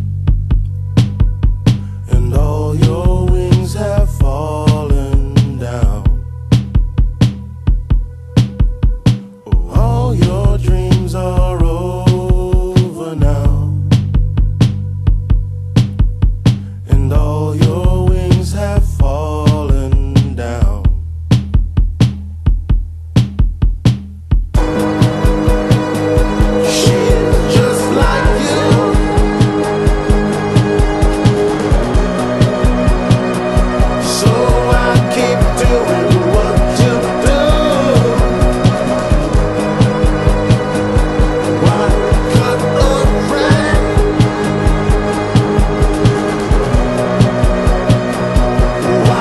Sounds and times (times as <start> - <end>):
Singing: 2.0 - 6.2, 9.4 - 13.8, 16.8 - 21.0, 26.4 - 31.5, 33.8 - 39.6, 40.5 - 44.8, 47.9 - 49.2.